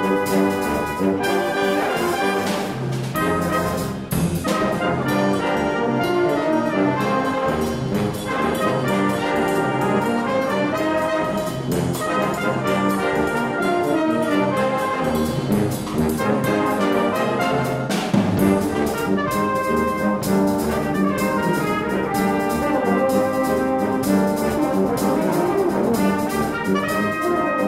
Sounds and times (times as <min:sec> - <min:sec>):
Music: 0:00.0 - 0:27.6.